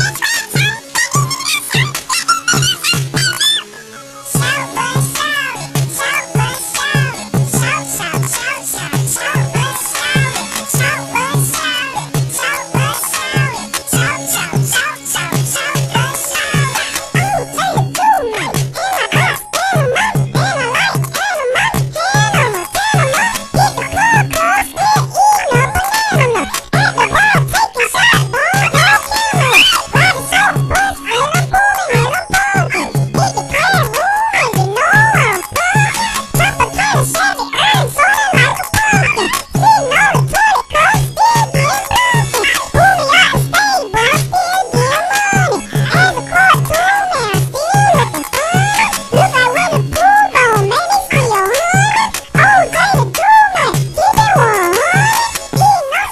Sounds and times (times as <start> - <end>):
Music: 0.0 - 56.1.